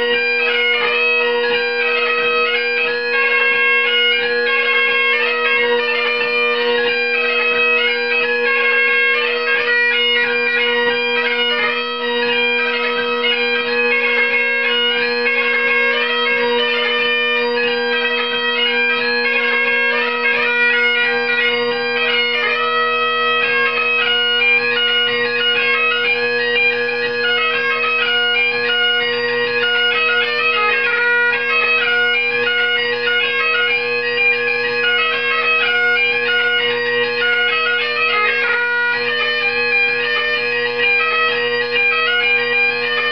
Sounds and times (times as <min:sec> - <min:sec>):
Bagpipes: 0:00.0 - 0:43.1.